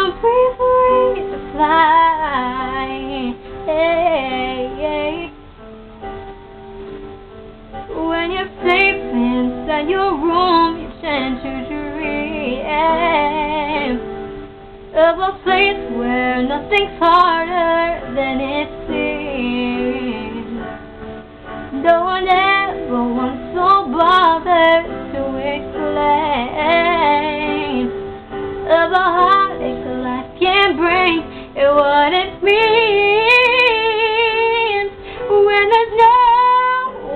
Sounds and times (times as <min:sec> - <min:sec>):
Female singing: 0:00.0 - 0:05.3, 0:07.9 - 0:14.0, 0:15.0 - 0:20.6, 0:21.8 - 0:27.9, 0:28.7 - 0:37.1
Music: 0:00.0 - 0:37.1.